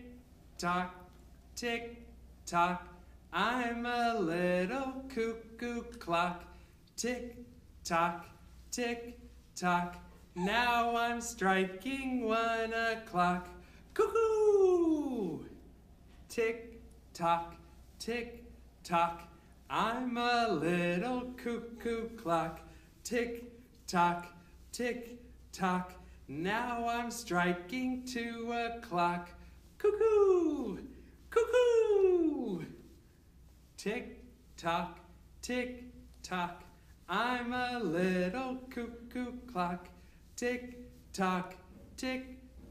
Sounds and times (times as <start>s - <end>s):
Speech: 0.0s - 15.6s, 16.3s - 32.9s, 33.8s - 42.7s.